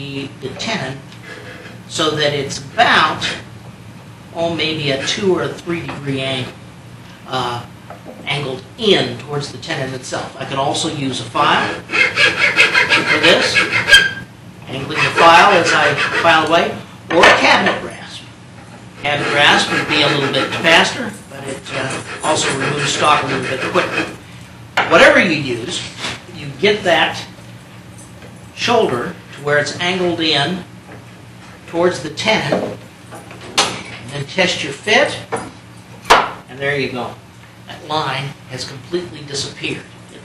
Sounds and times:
Speech: 0.0s - 1.1s, 1.9s - 3.4s, 4.4s - 6.6s, 7.3s - 11.8s, 13.0s - 13.7s, 14.7s - 18.3s, 19.0s - 24.2s, 24.9s - 27.4s, 28.6s - 30.7s, 31.7s - 32.8s, 34.1s - 35.3s, 36.5s - 40.2s.

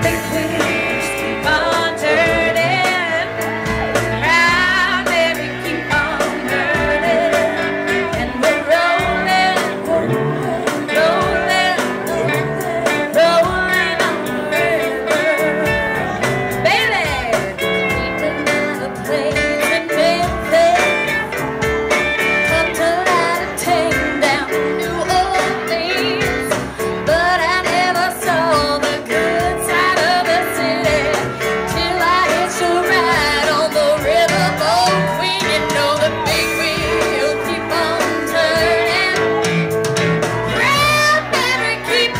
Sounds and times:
Music: 0.0s - 42.1s.

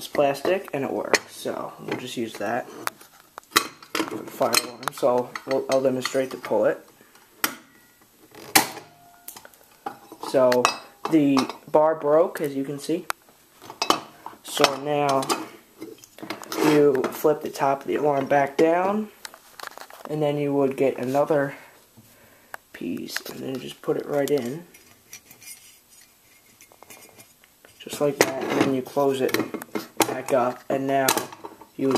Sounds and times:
Speech: 0.0s - 2.8s, 4.1s - 6.9s, 10.2s - 13.1s, 14.4s - 15.5s, 16.6s - 19.2s, 20.1s - 21.7s, 22.8s - 24.7s, 27.8s - 31.9s.

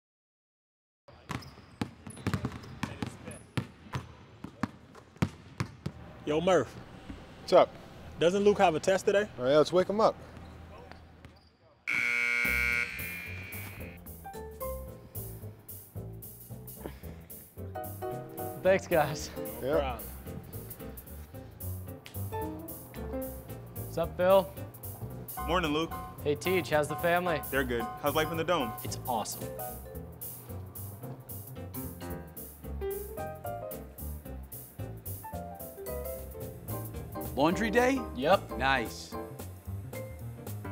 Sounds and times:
Basketball bounce: 1.3s - 6.0s.

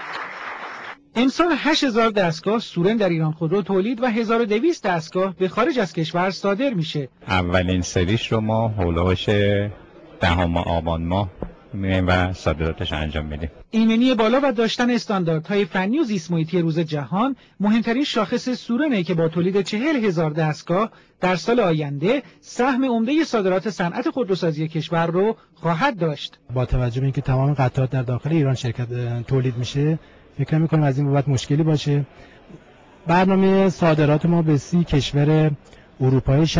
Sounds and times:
Speech: 1.1s - 32.2s, 33.0s - 36.5s.

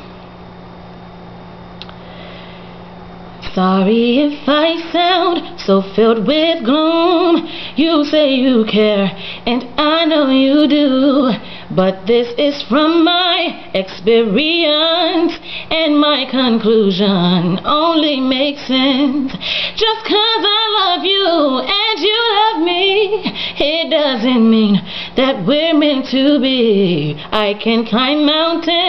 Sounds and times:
Female singing: 3.4s - 28.8s.

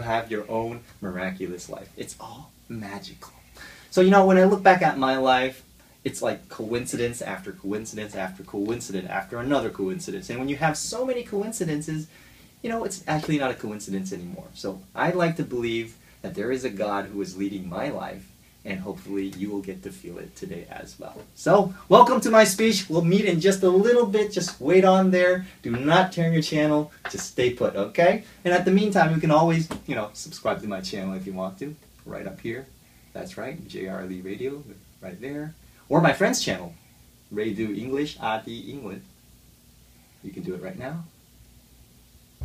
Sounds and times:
Male speech, man speaking: 0.0s - 39.1s, 40.2s - 41.1s.

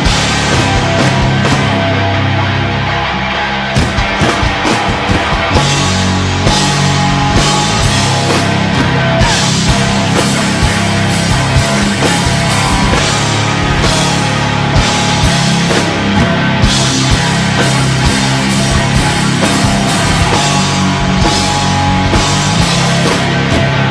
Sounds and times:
Music: 0.0s - 23.9s.

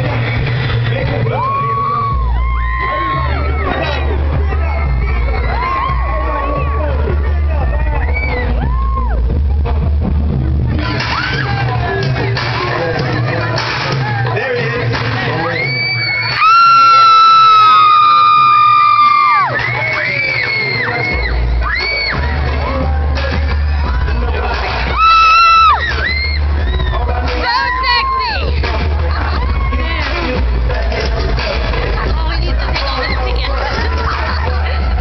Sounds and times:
Crowd: 0.0s - 35.0s
Cheering: 1.0s - 9.7s, 13.5s - 31.6s.

